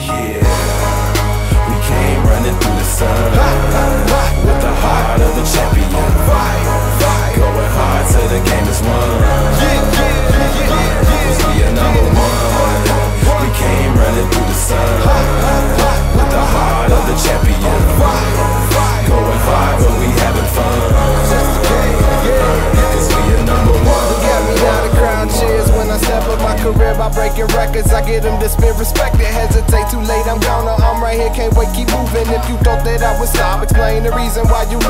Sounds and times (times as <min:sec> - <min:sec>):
Music: 0:00.0 - 0:34.8.